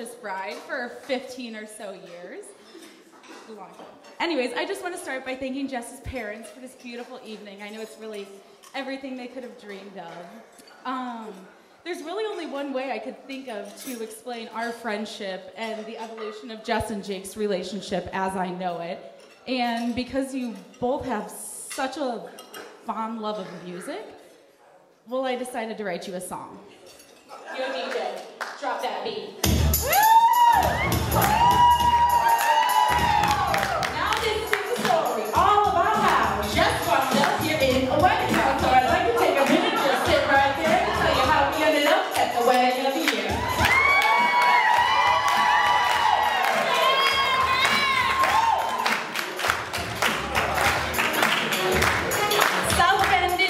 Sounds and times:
Female speech, woman speaking: 0:00.0 - 0:02.6, 0:03.5 - 0:22.3, 0:22.9 - 0:24.2, 0:25.1 - 0:26.7, 0:27.4 - 0:29.4, 0:33.9 - 0:43.5, 0:52.7 - 0:53.5
Narration, monologue: 0:00.0 - 0:27.4.

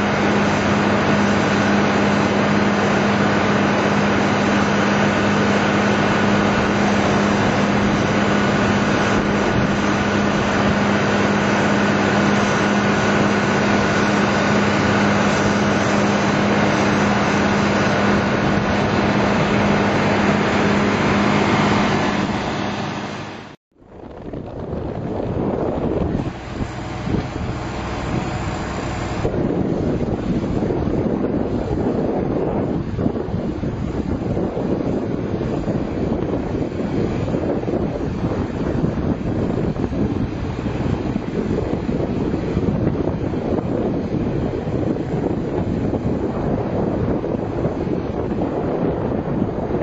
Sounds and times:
Outside, rural or natural: 0:00.0 - 0:49.8.

